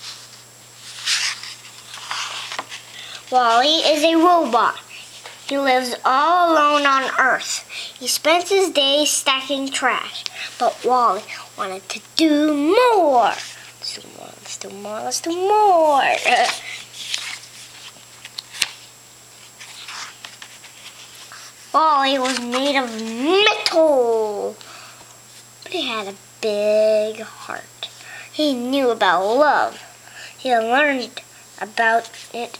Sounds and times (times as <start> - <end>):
Speech: 3.3 - 4.9, 5.5 - 16.7, 21.7 - 24.6, 25.6 - 32.5.